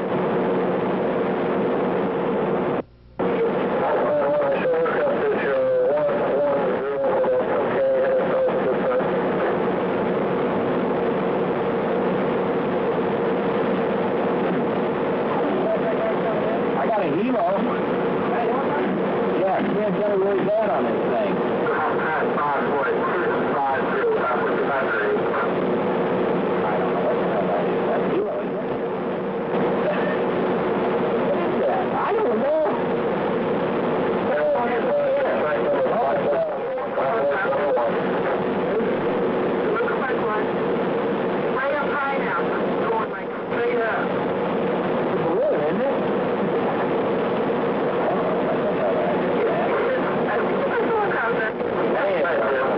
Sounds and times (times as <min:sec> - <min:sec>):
Speech: 0:03.2 - 0:09.6, 0:15.3 - 0:25.6, 0:26.6 - 0:28.9, 0:31.2 - 0:32.8, 0:34.2 - 0:40.5, 0:45.1 - 0:46.1, 0:48.0 - 0:52.7.